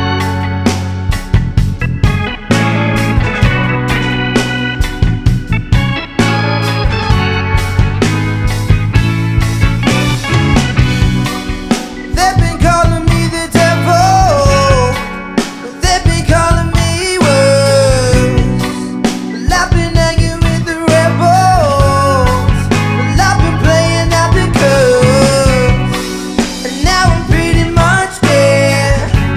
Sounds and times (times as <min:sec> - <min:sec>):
Music: 0:00.0 - 0:29.3.